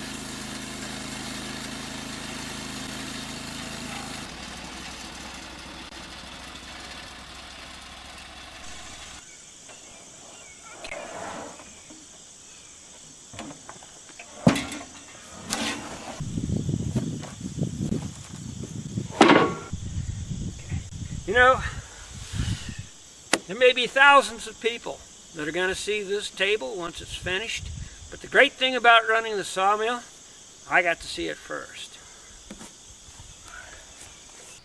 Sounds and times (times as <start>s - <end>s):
Wood: 19.1s - 19.6s.